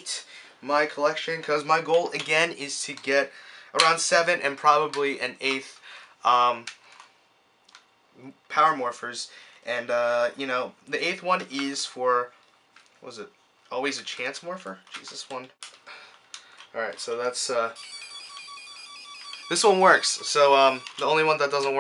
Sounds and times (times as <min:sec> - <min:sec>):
Speech: 0:00.0 - 0:06.7, 0:08.2 - 0:12.3, 0:13.0 - 0:15.6, 0:16.8 - 0:17.8, 0:19.5 - 0:21.8
Inside, small room: 0:00.0 - 0:21.8.